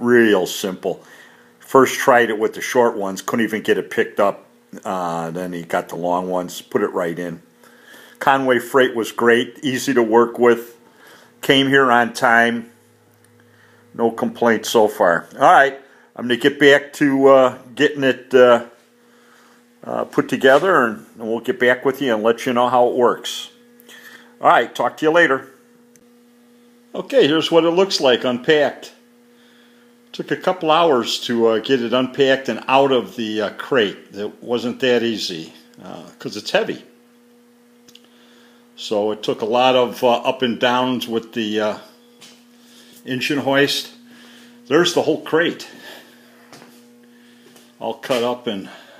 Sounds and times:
Hum: 0:00.0 - 0:49.0.

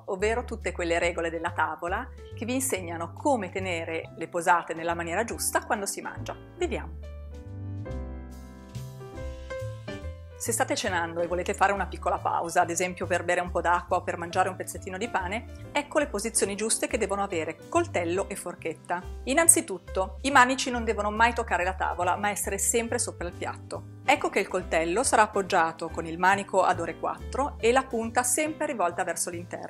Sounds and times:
Speech: 0:00.0 - 0:07.0, 0:10.4 - 0:29.7
Music: 0:00.0 - 0:29.7.

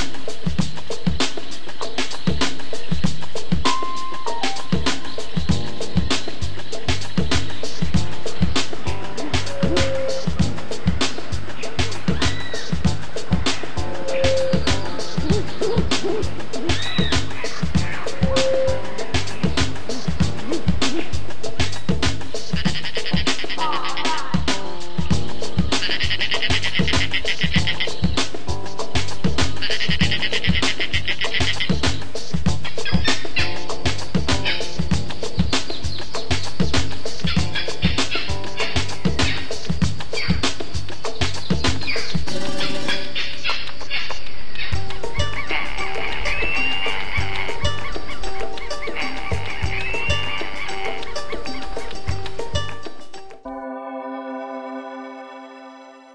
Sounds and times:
Music: 0:00.0 - 0:56.1
Bird: 0:00.2 - 0:12.9, 0:13.5 - 0:28.4, 0:29.4 - 0:51.9.

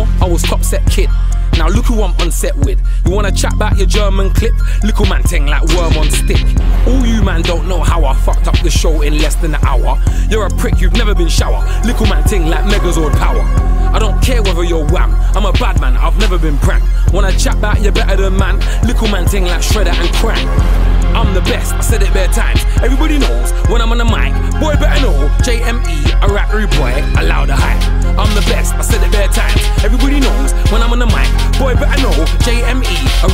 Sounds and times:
Rhythm and blues: 0:00.0 - 0:33.3.

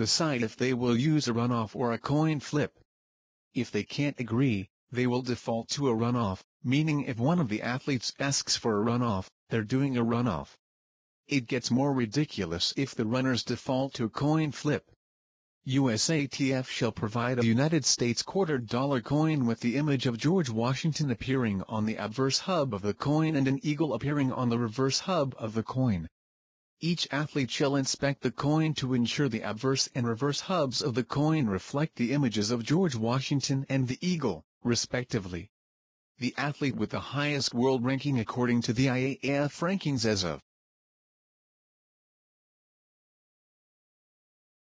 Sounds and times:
Speech: 0:00.0 - 0:02.8, 0:03.6 - 0:10.6, 0:11.3 - 0:15.0, 0:15.7 - 0:26.2, 0:26.8 - 0:35.5, 0:36.2 - 0:40.5.

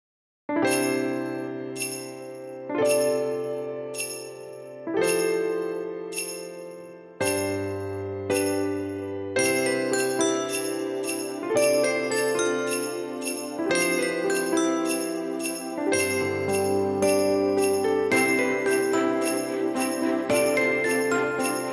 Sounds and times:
Music: 0:00.5 - 0:21.7.

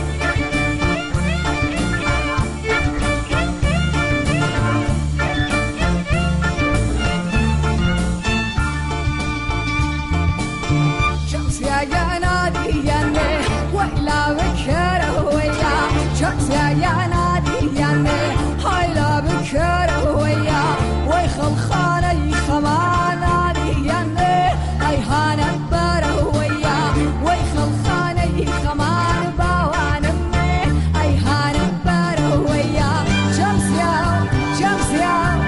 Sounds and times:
Funk: 0:00.0 - 0:35.4
Jazz: 0:00.0 - 0:35.4.

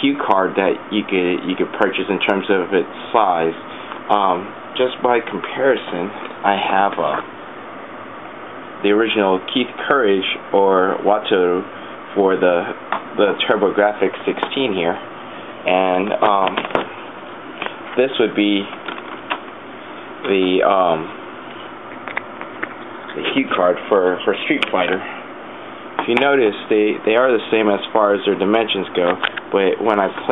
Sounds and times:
Speech: 0:00.0 - 0:07.3, 0:08.8 - 0:15.0, 0:15.6 - 0:16.8, 0:18.0 - 0:18.8, 0:20.2 - 0:21.2, 0:23.1 - 0:25.2, 0:26.0 - 0:30.3.

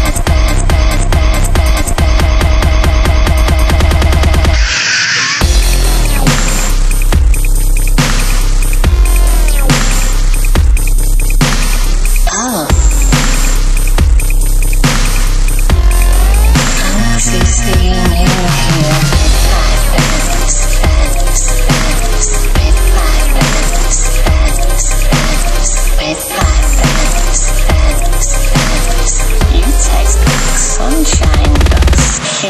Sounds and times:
Dubstep: 0:00.0 - 0:32.5.

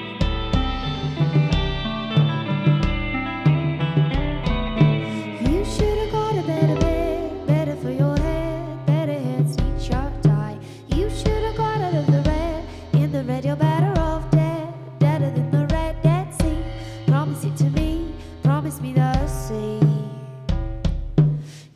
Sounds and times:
Music: 0:00.0 - 0:21.7.

